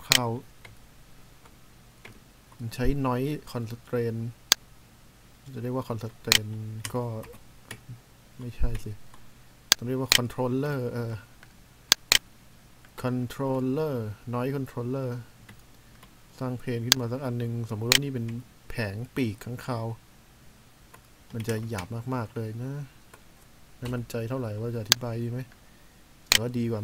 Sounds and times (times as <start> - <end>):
Speech: 0.0 - 0.5, 2.6 - 4.4, 5.5 - 7.4, 8.4 - 9.0, 9.8 - 11.3, 13.0 - 15.3, 16.4 - 20.0, 21.3 - 23.0, 23.8 - 25.5, 26.4 - 26.8.